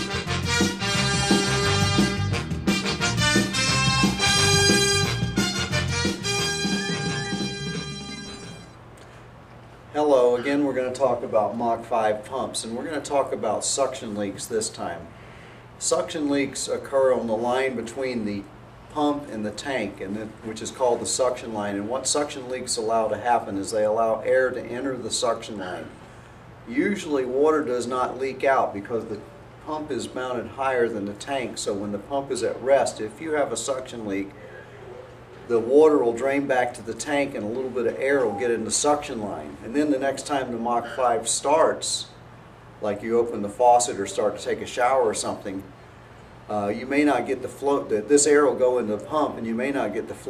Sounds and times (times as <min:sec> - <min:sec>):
Speech: 0:09.9 - 0:15.1, 0:15.8 - 0:26.0, 0:26.7 - 0:34.6, 0:35.5 - 0:42.2, 0:42.8 - 0:45.7, 0:46.5 - 0:50.2.